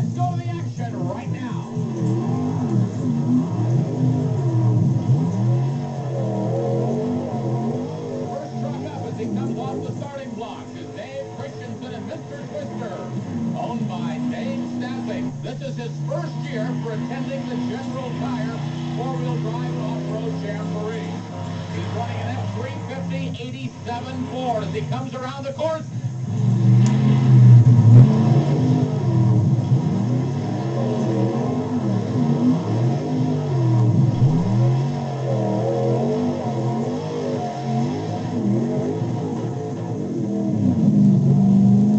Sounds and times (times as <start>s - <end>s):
Speech: 0.0s - 1.8s, 8.2s - 25.9s
Truck: 0.0s - 41.9s.